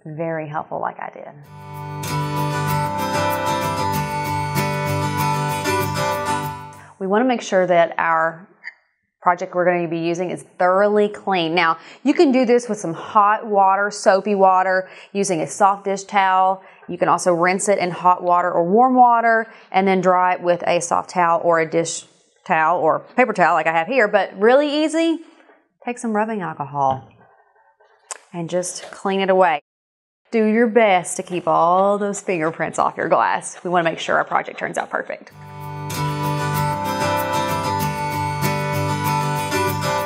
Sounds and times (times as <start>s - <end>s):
Speech: 0.0s - 1.4s, 7.0s - 8.5s, 9.3s - 25.2s, 25.9s - 27.1s, 28.2s - 29.6s, 30.3s - 35.4s.